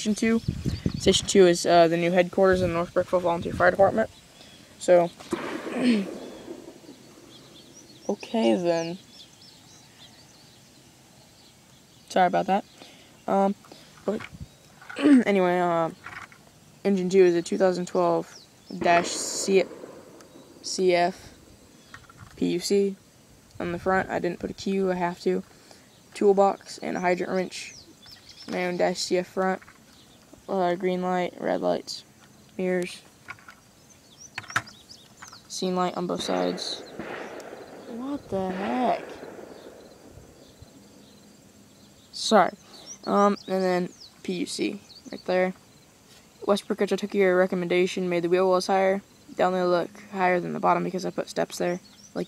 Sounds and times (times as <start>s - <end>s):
Speech: 0.0s - 0.4s, 1.0s - 4.1s, 4.8s - 5.2s, 8.1s - 9.0s, 12.1s - 12.7s, 13.3s - 14.2s, 15.0s - 16.0s, 16.9s - 19.7s, 20.6s - 21.3s, 22.4s - 23.0s, 23.6s - 25.4s, 26.2s - 27.8s, 28.5s - 29.6s, 30.4s - 32.0s, 32.6s - 33.0s, 35.5s - 36.9s, 37.9s - 39.2s, 42.2s - 45.6s, 46.4s - 52.2s.